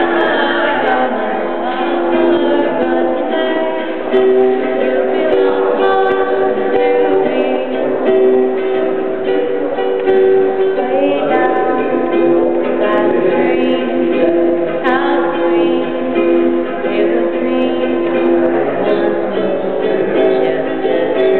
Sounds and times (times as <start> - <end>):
Music: 0.0 - 21.3.